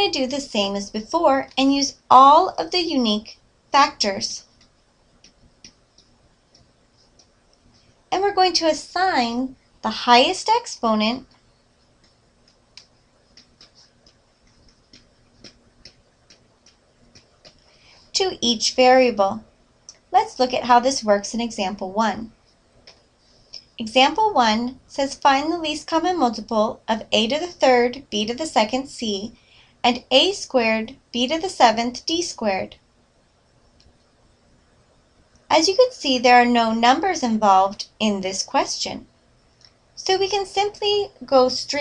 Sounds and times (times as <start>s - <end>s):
Narration, monologue: 0.0s - 41.8s.